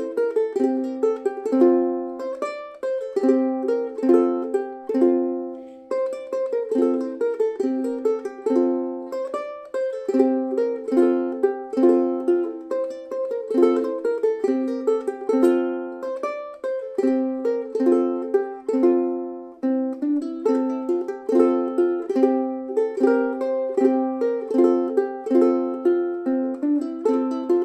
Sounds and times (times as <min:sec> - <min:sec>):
Ukulele: 0:00.0 - 0:27.6.